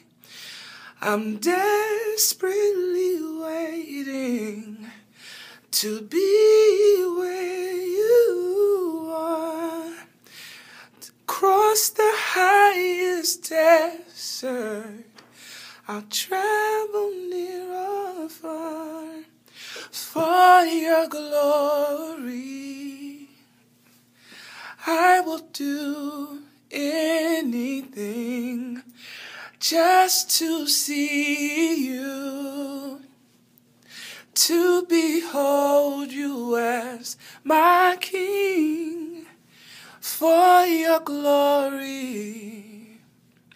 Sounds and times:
Male singing: 1.0 - 5.0, 5.7 - 10.1, 11.0 - 15.2, 15.8 - 19.3, 19.9 - 23.5, 24.8 - 28.9, 29.6 - 33.1, 34.3 - 39.4, 40.0 - 43.1.

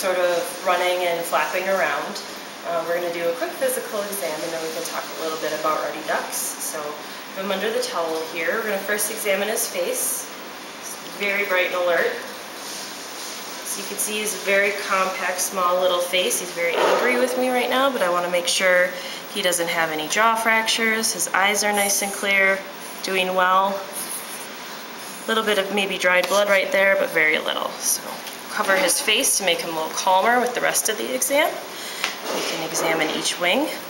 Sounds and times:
Speech: 0.0 - 12.3, 13.7 - 24.0, 25.3 - 31.6, 32.3 - 33.8.

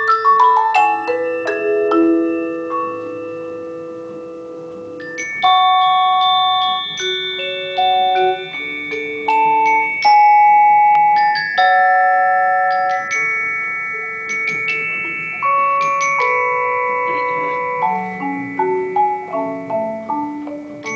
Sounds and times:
Glockenspiel: 0.0 - 20.9
Marimba, xylophone: 0.0 - 20.9.

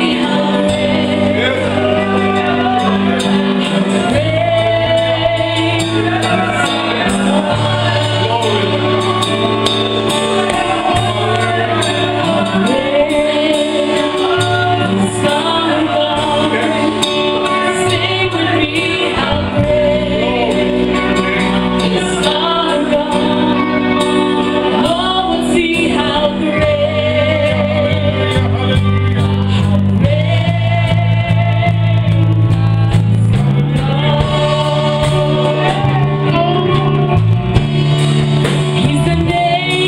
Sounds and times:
Female singing: 0.0 - 9.5, 10.4 - 37.6, 38.7 - 39.8
Music: 0.0 - 39.8.

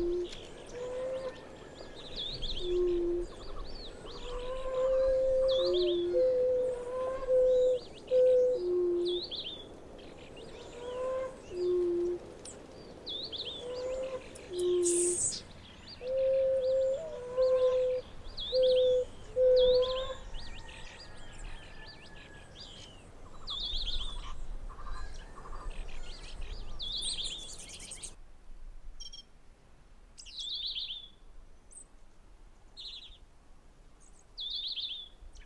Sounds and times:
Bird: 0.0 - 28.2
Outside, rural or natural: 0.0 - 35.4.

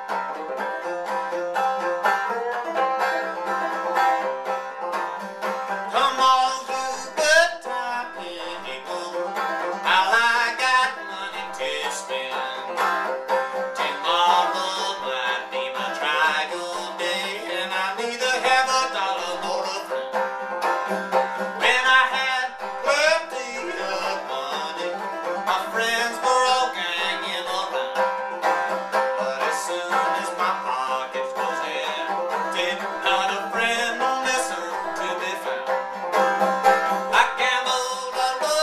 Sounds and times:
Banjo: 0.0 - 38.6.

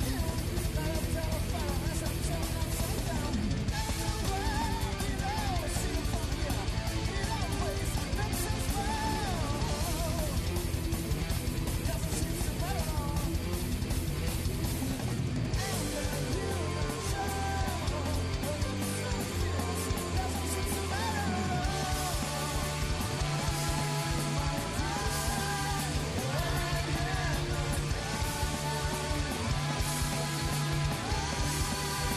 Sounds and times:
Heavy metal: 0.0 - 32.1
Punk rock: 0.0 - 32.1
Rock and roll: 0.0 - 32.1
Disco: 15.6 - 32.1.

